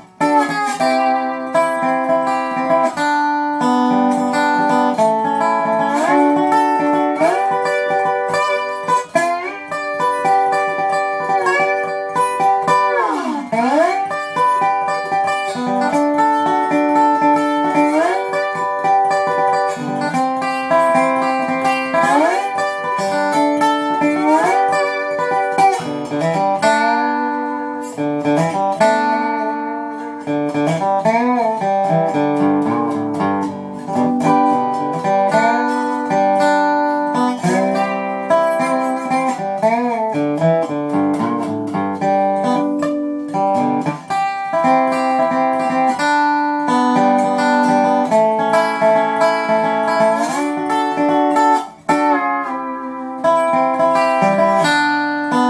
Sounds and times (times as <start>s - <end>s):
Strum: 0.0s - 55.4s.